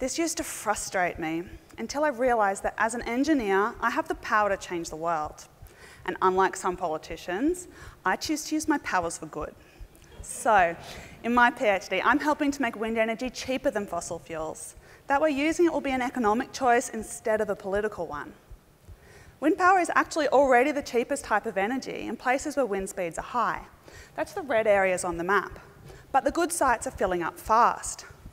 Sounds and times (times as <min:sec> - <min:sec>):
Speech: 0:00.0 - 0:05.5, 0:06.1 - 0:18.4, 0:19.4 - 0:25.6, 0:26.2 - 0:28.1.